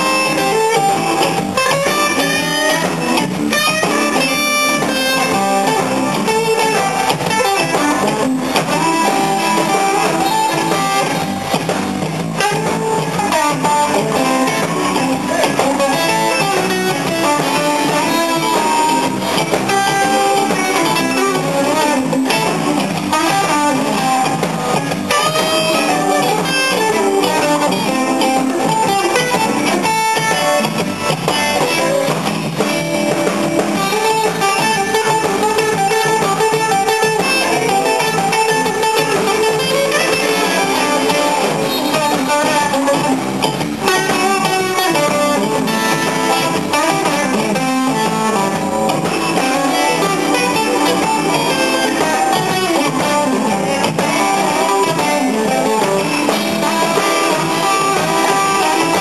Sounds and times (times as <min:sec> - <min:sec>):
Bass guitar: 0:00.0 - 0:59.0
Blues: 0:00.0 - 0:59.0
Electric guitar: 0:00.0 - 0:59.0.